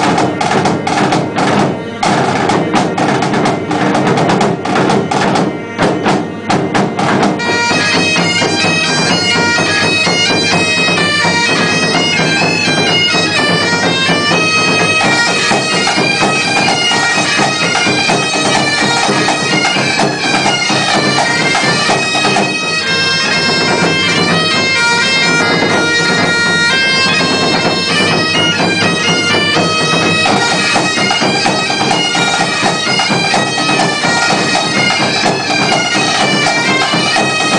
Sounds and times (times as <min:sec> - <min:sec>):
Bagpipes: 0:00.0 - 0:37.5
Drum: 0:00.0 - 0:37.5.